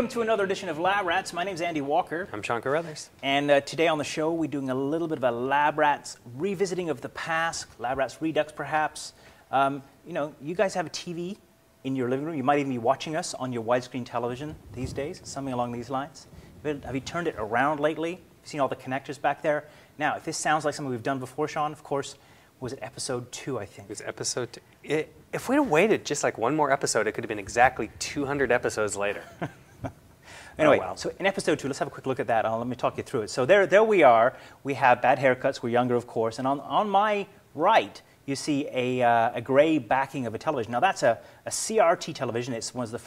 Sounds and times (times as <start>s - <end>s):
Speech: 0.0s - 29.3s, 30.6s - 43.0s.